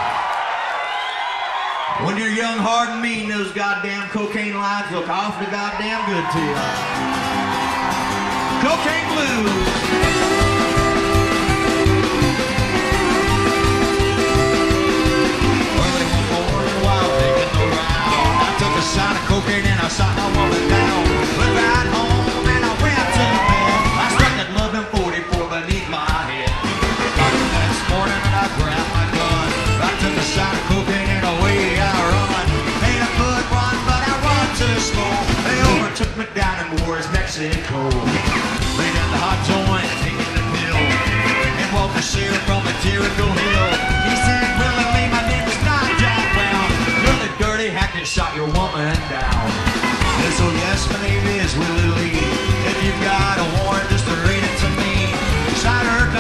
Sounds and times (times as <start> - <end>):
Rock and roll: 0.0 - 56.2
Singing: 15.0 - 26.4, 27.2 - 36.2, 38.6 - 48.9, 50.2 - 56.2.